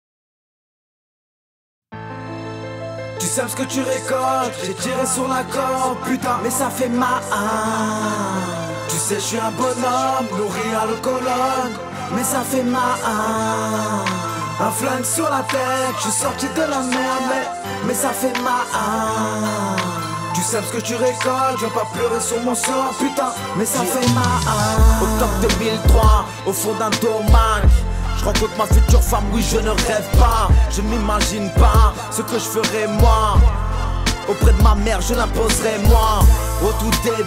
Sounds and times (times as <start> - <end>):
Music: 1.9 - 37.2.